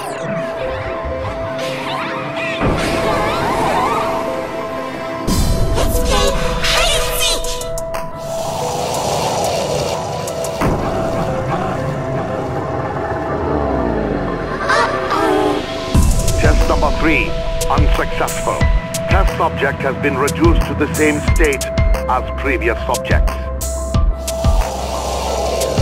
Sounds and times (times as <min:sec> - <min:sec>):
Music: 0:00.0 - 0:25.8.